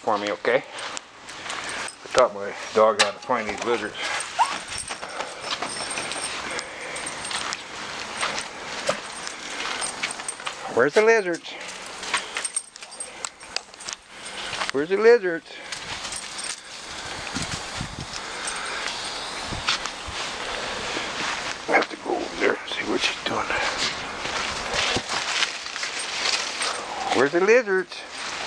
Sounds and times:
Speech: 0:00.0 - 0:00.7, 0:02.1 - 0:04.0, 0:10.7 - 0:11.6, 0:14.7 - 0:15.6, 0:21.7 - 0:23.8, 0:27.1 - 0:28.1.

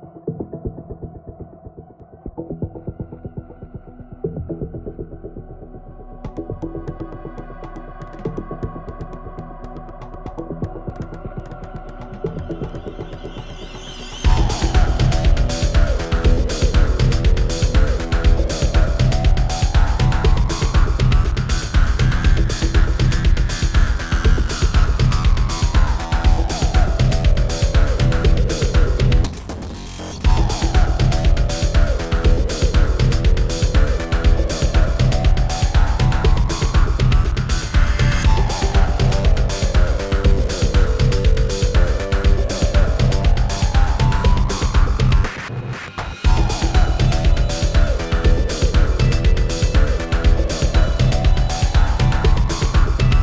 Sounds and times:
Music: 0:00.0 - 0:53.2.

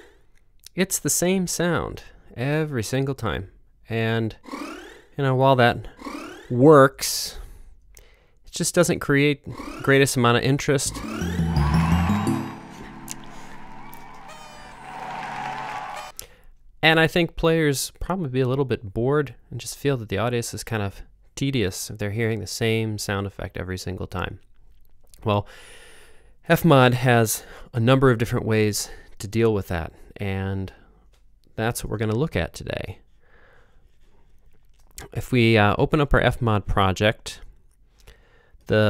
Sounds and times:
Speech: 0:00.7 - 0:04.4, 0:05.2 - 0:05.9, 0:06.5 - 0:07.4, 0:08.5 - 0:11.1, 0:16.8 - 0:24.4, 0:25.2 - 0:25.5, 0:26.5 - 0:30.8, 0:31.6 - 0:33.0, 0:35.0 - 0:37.5, 0:38.7 - 0:38.8
Sound effect: 0:10.9 - 0:15.0
Music: 0:10.9 - 0:16.1.

